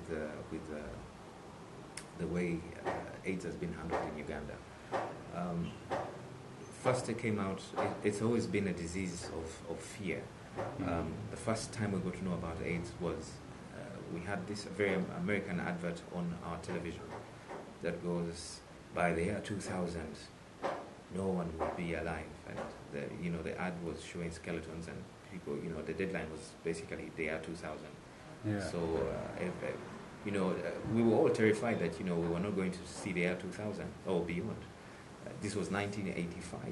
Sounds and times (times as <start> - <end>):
Speech: 0.0 - 1.1, 2.0 - 4.6, 5.3 - 5.8, 6.8 - 17.2, 17.8 - 20.4, 21.1 - 36.7.